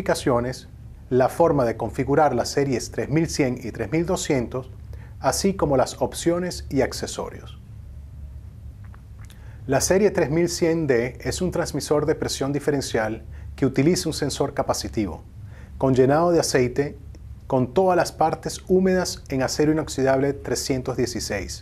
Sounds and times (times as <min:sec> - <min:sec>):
Speech: 0:00.0 - 0:07.6, 0:09.7 - 0:21.6.